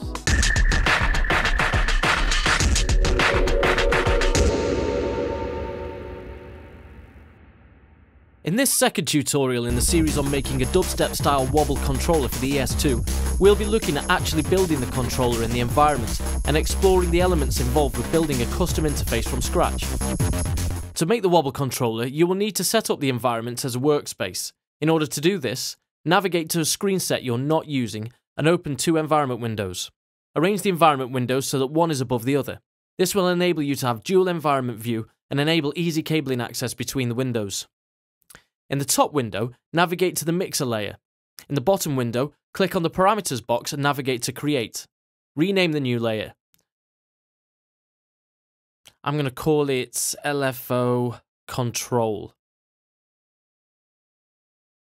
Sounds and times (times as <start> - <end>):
Music: 0.0 - 7.4, 9.7 - 21.0
Speech: 8.4 - 19.9, 21.0 - 37.7, 38.7 - 46.4, 48.9 - 52.4.